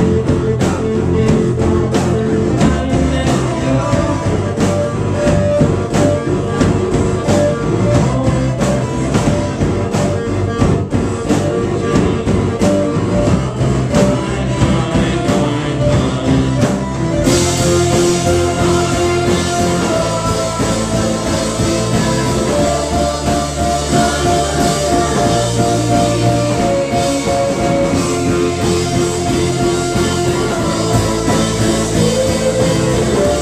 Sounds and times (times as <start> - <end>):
Music: 0.0 - 33.4.